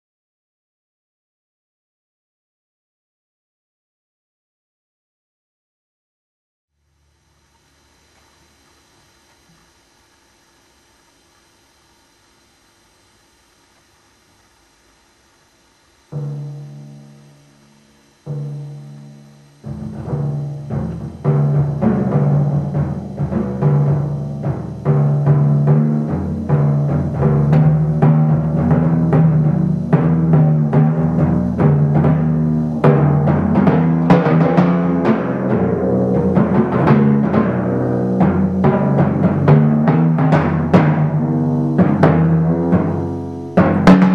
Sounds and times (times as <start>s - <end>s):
Drum kit: 15.8s - 44.1s
Timpani: 16.0s - 44.1s.